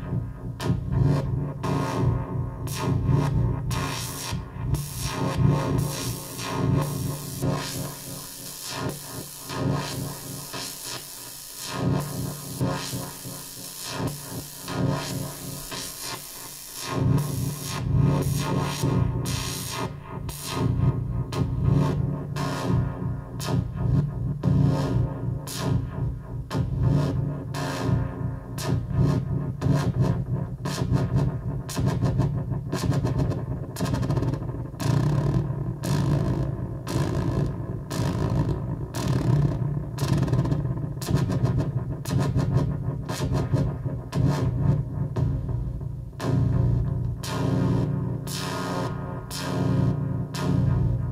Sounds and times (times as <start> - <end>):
Inside, small room: 0.0 - 51.1
Synthesizer: 0.0 - 51.1.